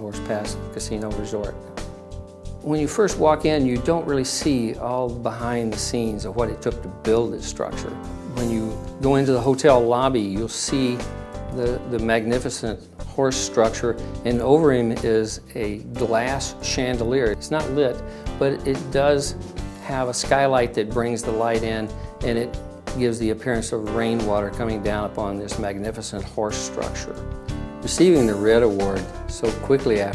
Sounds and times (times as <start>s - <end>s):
Speech: 0.0s - 1.6s, 2.6s - 27.2s, 27.8s - 30.1s
Music: 0.0s - 30.1s.